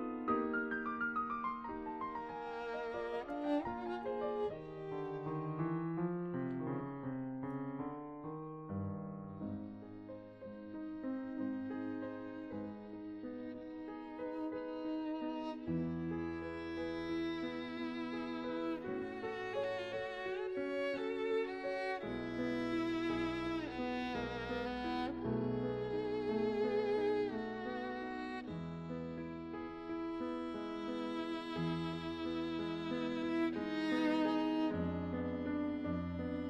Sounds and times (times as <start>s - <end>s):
Violin, fiddle: 0.0s - 6.2s, 9.5s - 36.4s.